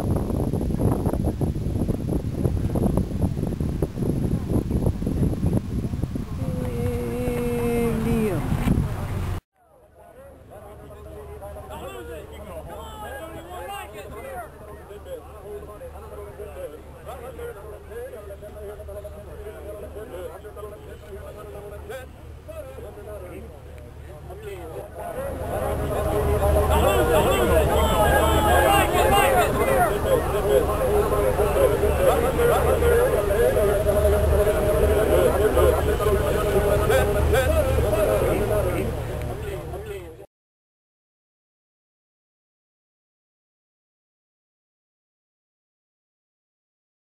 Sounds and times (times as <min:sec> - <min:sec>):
Vehicle: 0:06.2 - 0:40.2.